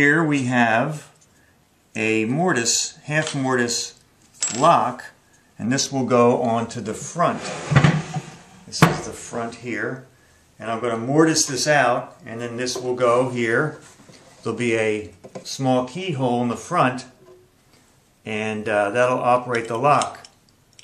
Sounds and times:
Speech: 0.0 - 1.2, 2.0 - 7.5, 8.7 - 13.8, 14.4 - 17.2, 18.3 - 20.3
Inside, small room: 0.0 - 20.8.

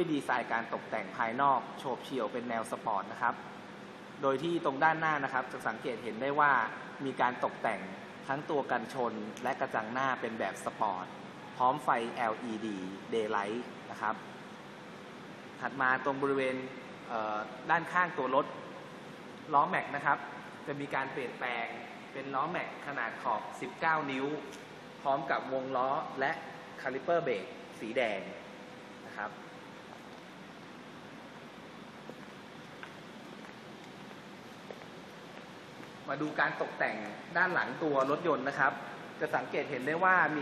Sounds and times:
Speech: 0.0 - 3.5, 4.2 - 14.3, 15.6 - 18.8, 19.5 - 28.4, 29.1 - 29.4, 36.1 - 40.4.

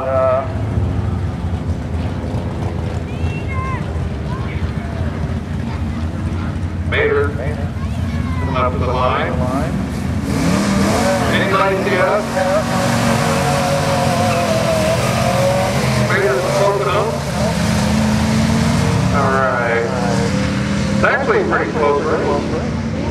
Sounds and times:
Speech: 21.0 - 22.6.

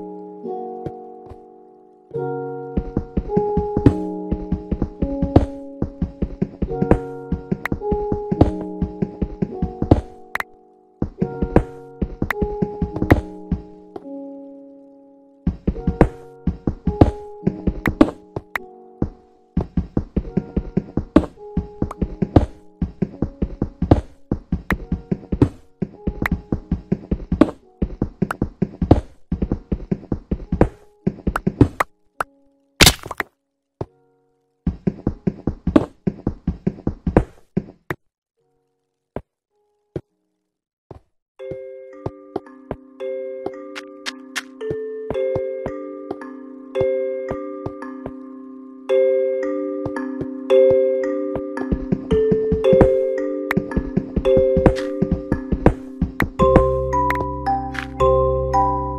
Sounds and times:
Glockenspiel: 41.4 - 58.9.

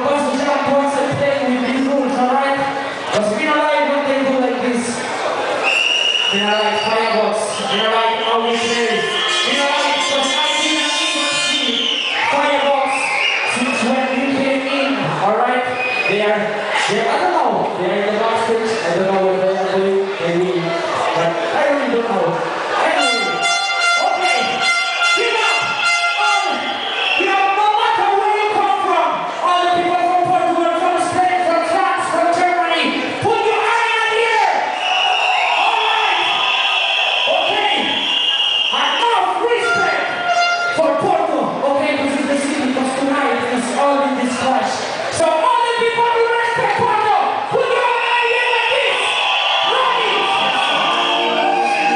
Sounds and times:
Speech: 0.0 - 5.1, 6.3 - 26.6, 27.2 - 34.6, 37.3 - 38.0, 38.7 - 51.9
Cheering: 0.0 - 41.3, 44.0 - 51.9.

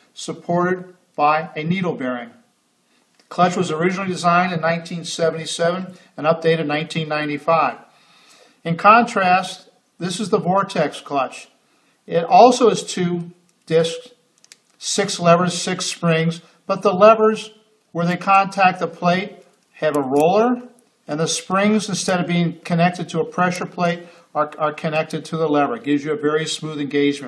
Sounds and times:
Speech: 0.2 - 2.5, 3.3 - 7.9, 8.6 - 14.2, 14.8 - 27.2.

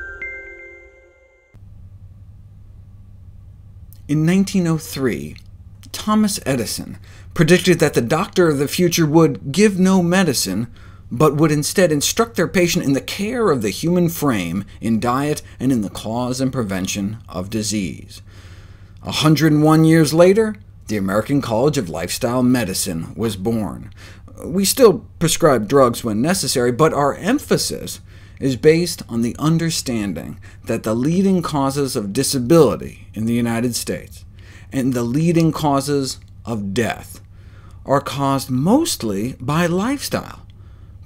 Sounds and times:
Speech: 4.0 - 18.3, 19.0 - 40.5.

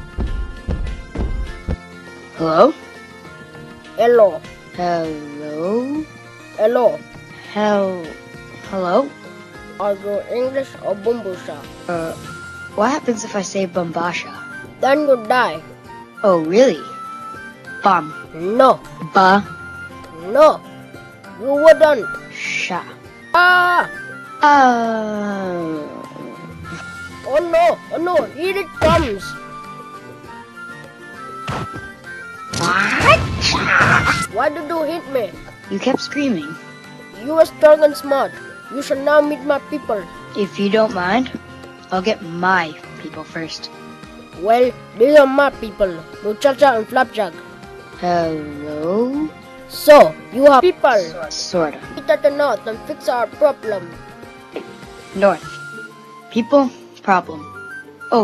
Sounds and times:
Music: 0.0 - 58.2
Speech: 9.8 - 12.2, 12.8 - 15.6, 27.3 - 29.4, 37.2 - 43.7, 44.4 - 47.4, 48.0 - 53.9.

